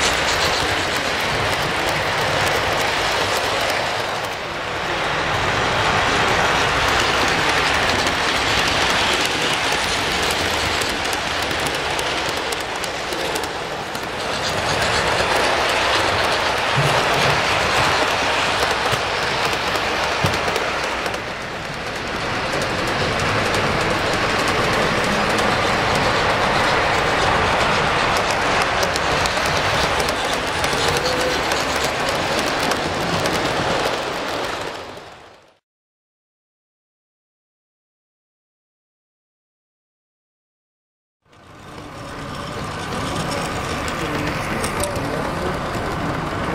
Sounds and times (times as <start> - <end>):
Clickety-clack: 0.0 - 4.4, 6.1 - 35.6, 41.3 - 46.5
Railroad car, train wagon: 0.0 - 35.6, 41.2 - 46.5
Train: 0.0 - 35.6, 41.2 - 46.5.